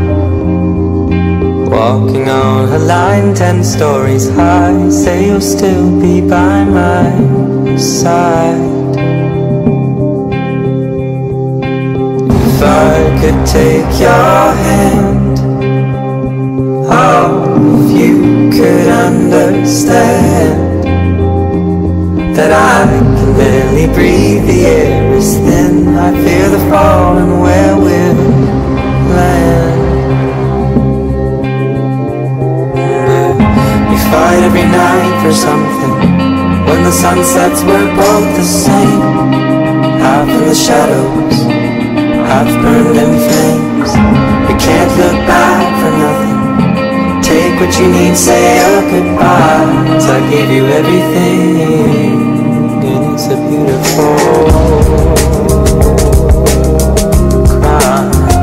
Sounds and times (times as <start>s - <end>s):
Harmonic: 0.0s - 58.4s
Music: 0.0s - 58.4s.